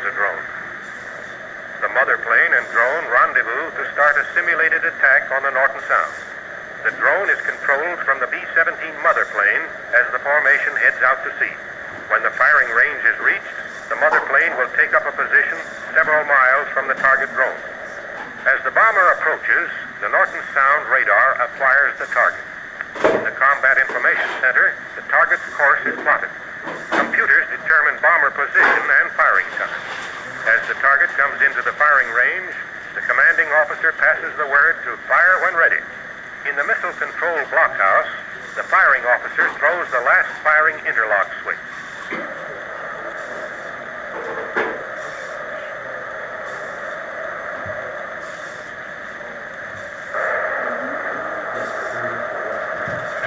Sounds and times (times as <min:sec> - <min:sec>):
Speech: 0:00.0 - 0:00.5, 0:01.8 - 0:17.6, 0:18.4 - 0:22.4, 0:23.0 - 0:41.6, 0:50.2 - 0:53.2.